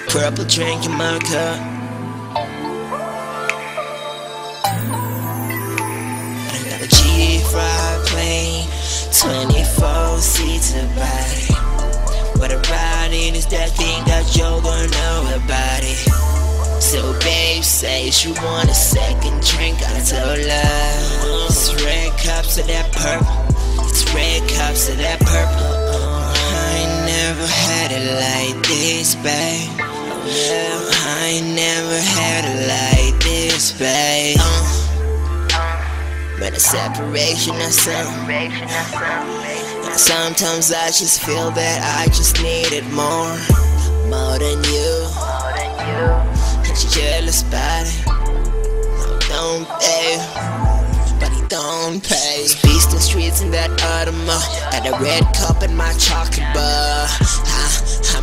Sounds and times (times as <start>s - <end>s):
Music: 0.0s - 58.2s.